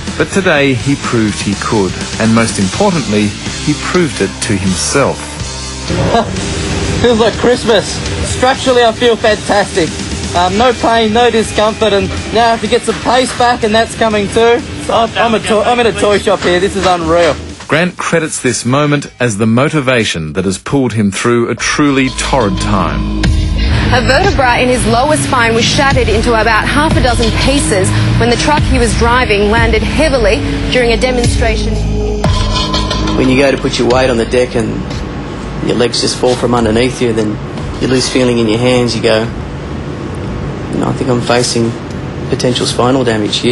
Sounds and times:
Music: 0.0s - 20.2s, 21.6s - 39.2s
Speech: 7.1s - 23.0s.

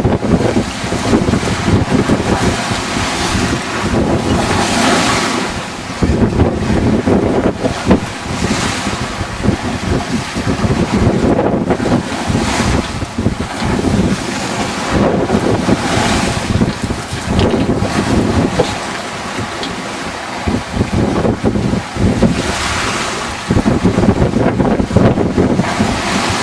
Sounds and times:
Sailboat, sailing ship: 0.0s - 26.4s
Waves, surf: 0.0s - 26.4s
Wind noise (microphone): 0.0s - 26.4s.

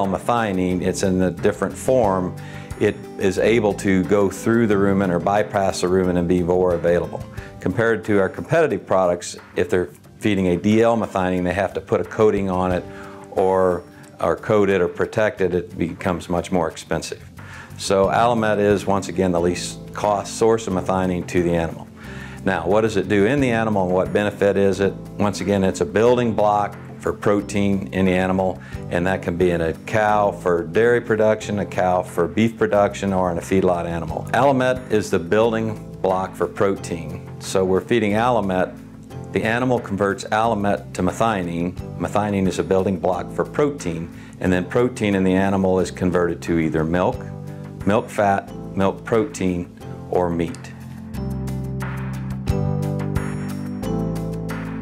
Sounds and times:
Speech: 0.0s - 17.2s, 17.8s - 50.8s
Music: 0.0s - 54.8s.

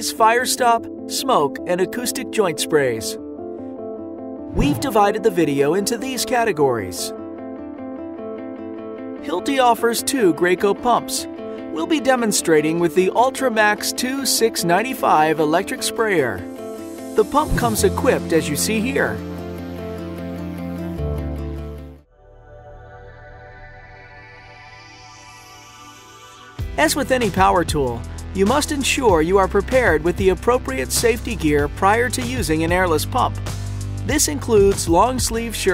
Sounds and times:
Speech: 0.0s - 3.2s, 4.5s - 7.2s, 9.3s - 16.4s, 17.2s - 19.2s, 26.8s - 33.4s, 34.1s - 35.7s
Music: 0.0s - 35.7s.

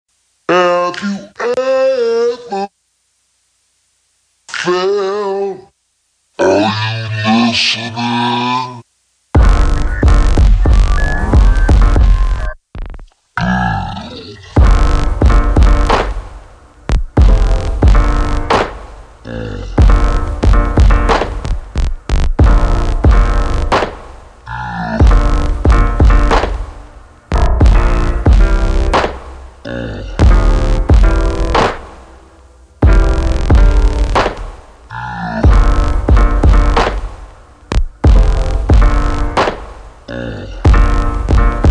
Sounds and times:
Speech: 0.5s - 2.7s, 4.5s - 5.7s, 6.4s - 8.9s
Music: 9.3s - 13.2s, 14.5s - 41.7s.

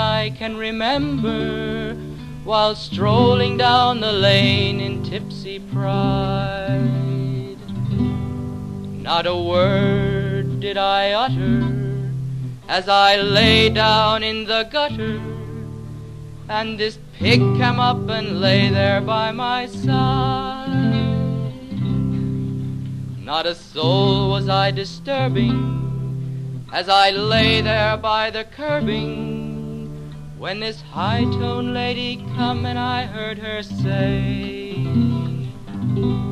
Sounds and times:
Music: 0.0s - 36.3s.

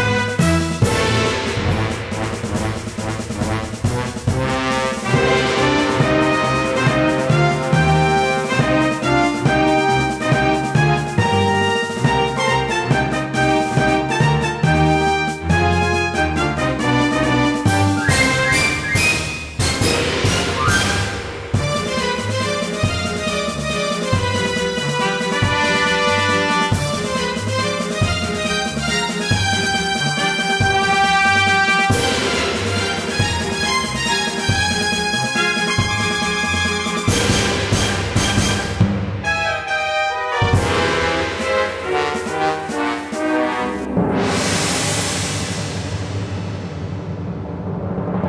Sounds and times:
Music: 0.0s - 48.2s.

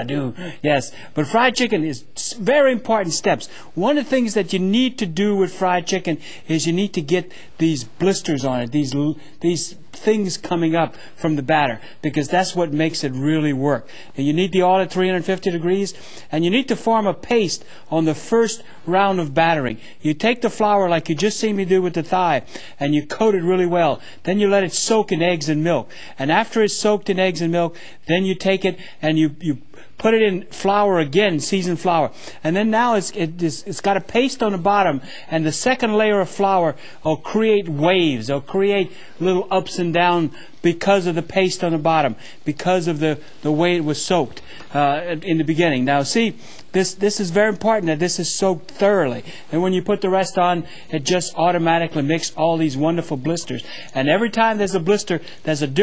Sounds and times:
Speech: 0.0s - 55.8s.

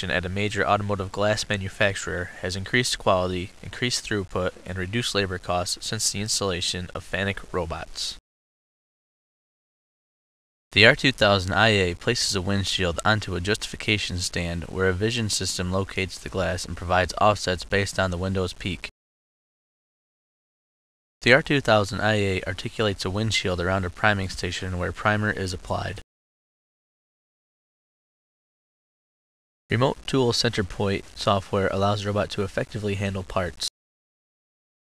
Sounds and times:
Speech: 0.0s - 8.2s, 10.8s - 18.9s, 21.2s - 26.0s, 29.7s - 33.8s.

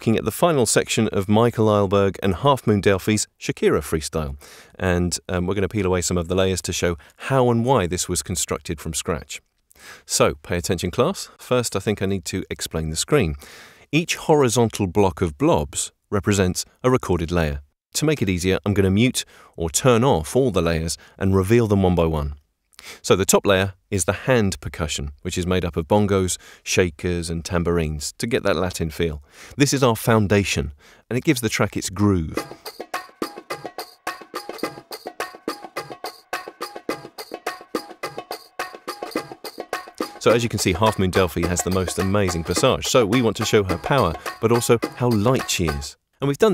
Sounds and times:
Speech: 0.0s - 9.4s, 10.0s - 22.4s, 23.0s - 32.5s, 40.2s - 46.5s.

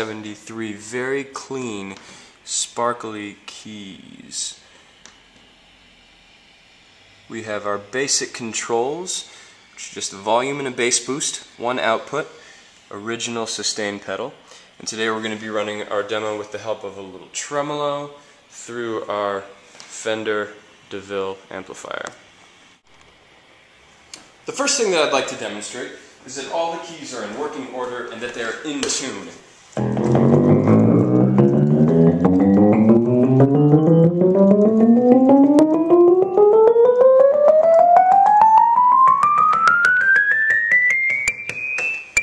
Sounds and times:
Speech: 0.0s - 4.7s, 7.3s - 22.3s, 24.5s - 29.5s.

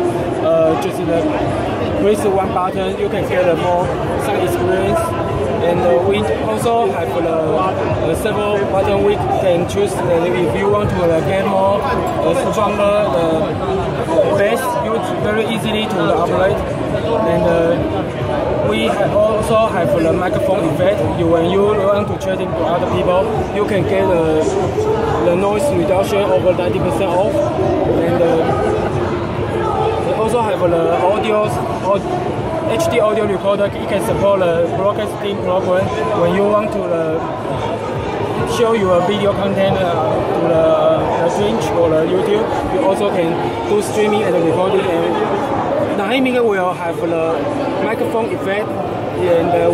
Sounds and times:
Speech: 0.0s - 49.7s.

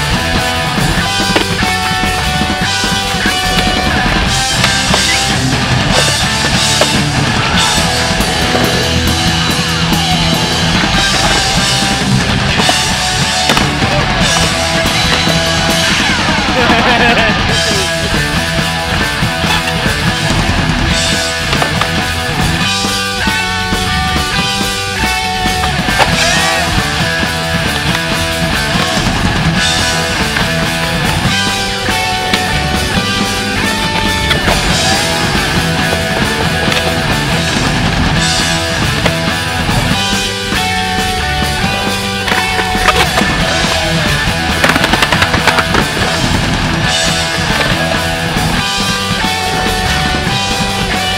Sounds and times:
Punk rock: 0.0s - 51.1s
Skateboard: 0.0s - 51.1s.

